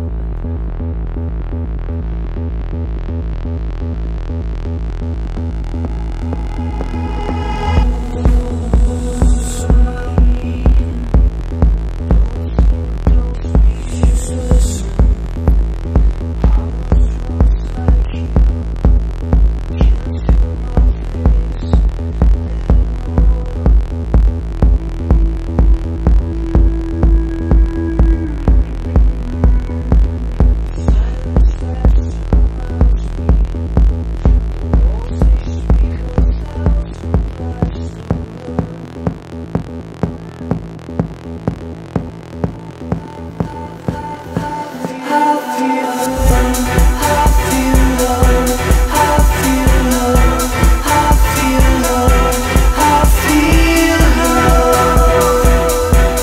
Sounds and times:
Electronica: 0.0s - 56.2s.

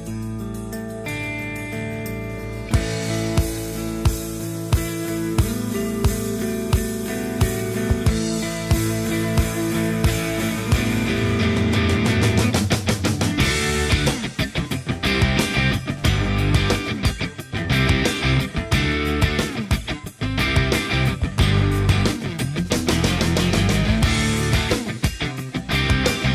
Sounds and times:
Music: 0.0s - 26.3s.

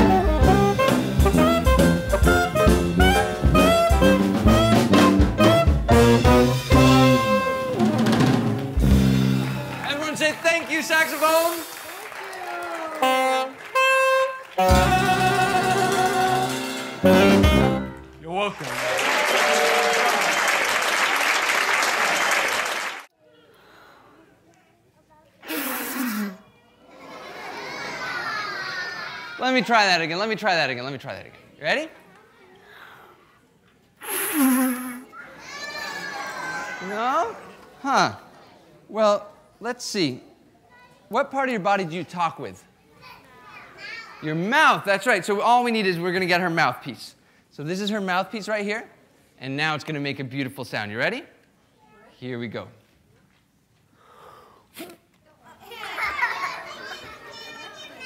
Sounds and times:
Jazz: 0.0s - 9.8s, 13.0s - 18.2s.

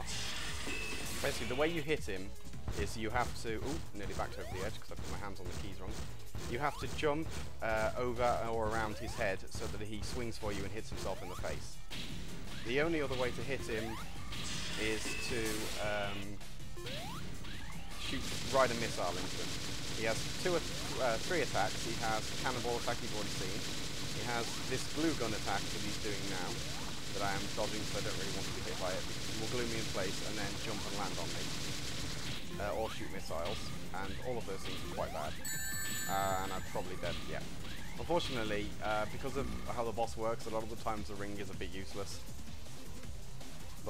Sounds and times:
Speech: 1.2s - 11.8s, 12.7s - 14.0s, 14.8s - 16.4s, 18.0s - 23.6s, 24.2s - 26.6s, 27.2s - 31.4s, 32.5s - 35.4s, 36.1s - 37.4s, 38.0s - 42.2s.

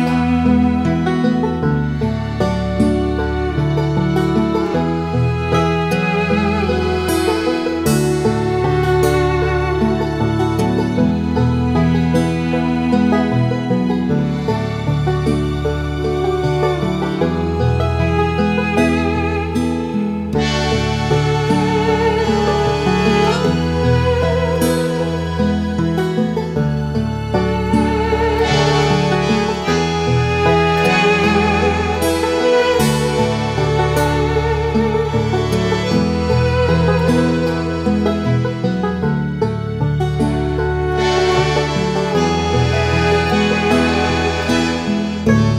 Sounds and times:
Background music: 0.0s - 45.5s.

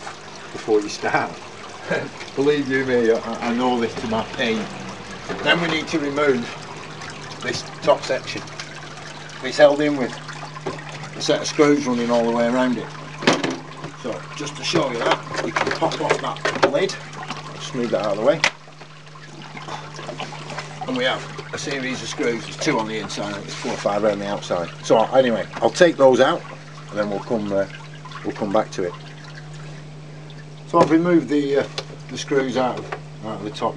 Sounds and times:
Water: 0.0s - 33.7s.

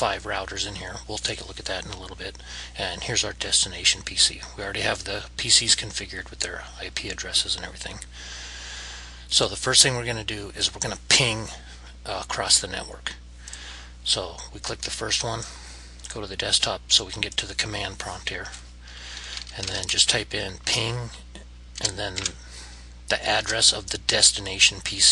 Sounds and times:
Speech: 0.0s - 8.1s, 9.3s - 13.2s, 14.0s - 18.6s, 19.5s - 22.4s, 23.1s - 25.1s.

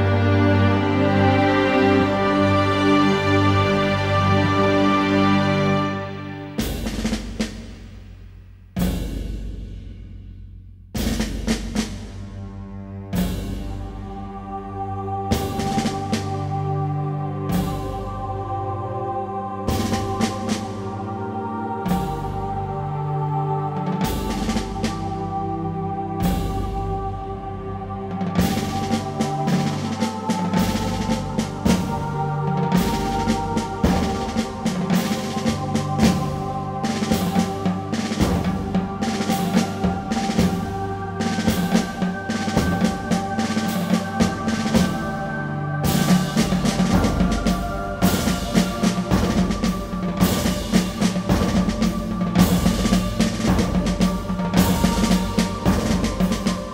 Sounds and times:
Music: 0.0s - 56.7s.

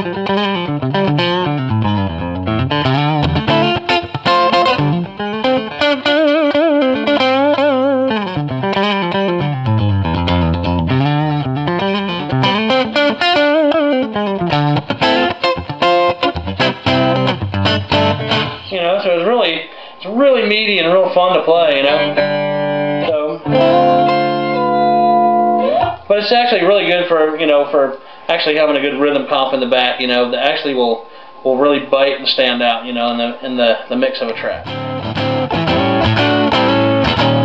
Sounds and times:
Blues: 0.0s - 18.8s, 21.6s - 26.1s, 34.6s - 37.4s
Guitar: 0.0s - 30.7s, 33.4s - 37.4s
Inside, small room: 0.0s - 37.4s
Speech: 18.7s - 22.2s, 23.1s - 23.5s, 25.8s - 34.7s.

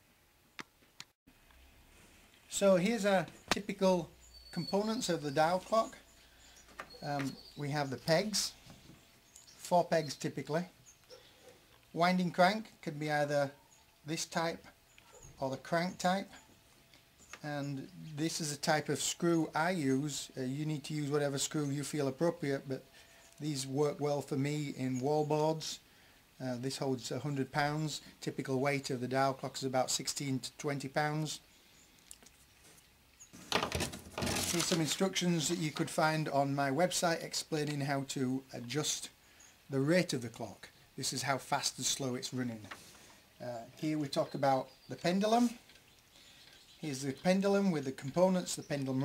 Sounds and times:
Speech: 2.5s - 6.0s, 7.0s - 8.6s, 9.6s - 10.7s, 12.0s - 14.7s, 15.4s - 16.4s, 17.4s - 22.8s, 23.4s - 25.8s, 26.4s - 31.4s, 34.4s - 42.7s, 43.4s - 45.6s, 46.8s - 49.0s.

